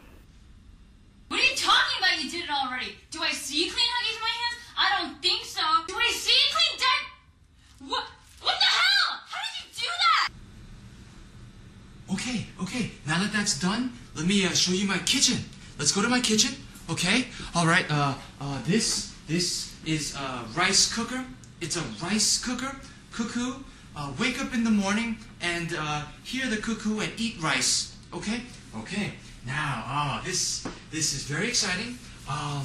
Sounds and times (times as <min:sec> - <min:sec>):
Inside, small room: 0:00.0 - 0:32.6
Speech: 0:12.1 - 0:32.6.